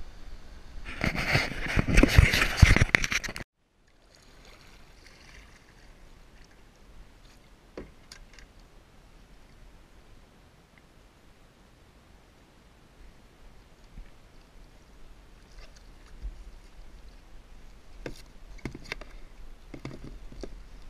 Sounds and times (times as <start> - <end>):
Rowboat, canoe, kayak: 0.2 - 20.8.